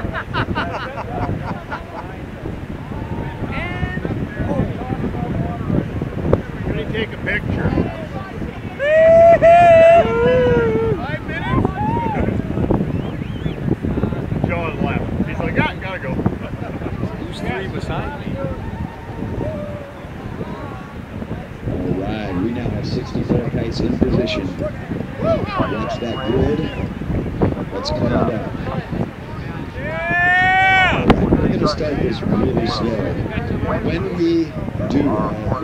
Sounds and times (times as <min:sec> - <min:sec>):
Outside, rural or natural: 0:00.0 - 0:35.6
Speech: 0:16.9 - 0:18.6, 0:21.8 - 0:26.8, 0:27.7 - 0:30.1, 0:30.9 - 0:35.6.